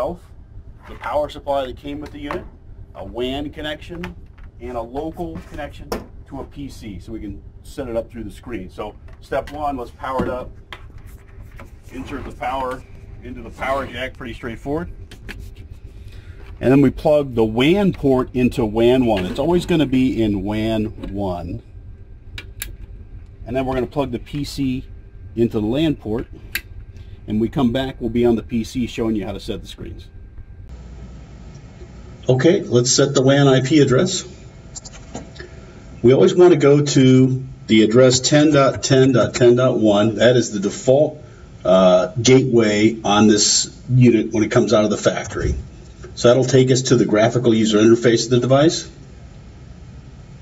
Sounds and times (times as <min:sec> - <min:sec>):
Speech: 0:00.0 - 0:00.2, 0:00.9 - 0:10.5, 0:11.9 - 0:14.9, 0:16.6 - 0:21.6, 0:23.4 - 0:26.4, 0:27.3 - 0:30.1, 0:32.3 - 0:34.4, 0:36.0 - 0:49.0.